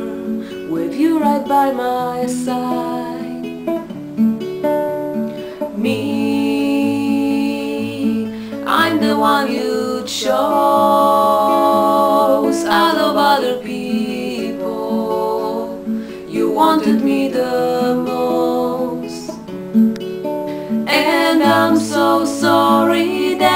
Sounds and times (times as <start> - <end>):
Acoustic guitar: 0.0 - 23.5
Strum: 0.0 - 23.5.